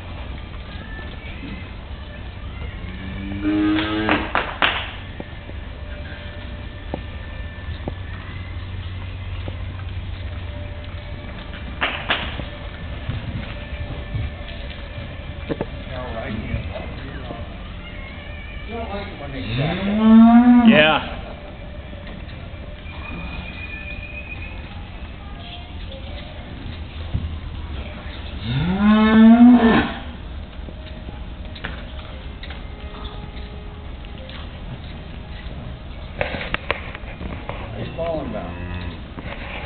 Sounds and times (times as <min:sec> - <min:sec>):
Clip-clop: 0:00.0 - 0:20.0, 0:20.7 - 0:39.6.